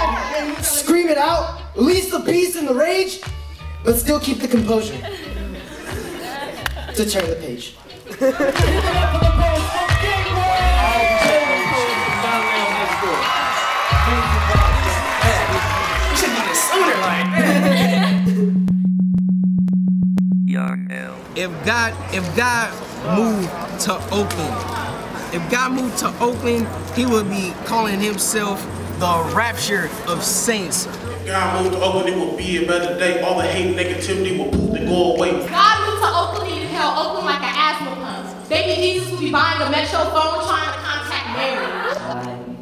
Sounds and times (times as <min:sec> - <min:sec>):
Music: 0:00.0 - 0:21.0, 0:21.6 - 0:42.6
Speech: 0:20.5 - 0:21.7.